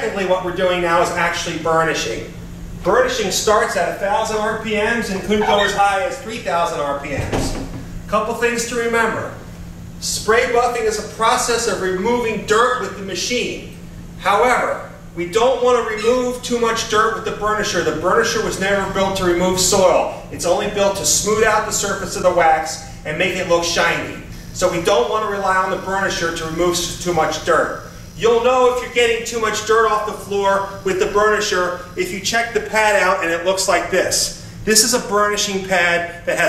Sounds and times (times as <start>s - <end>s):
Speech: 0.0s - 9.4s, 10.0s - 36.4s.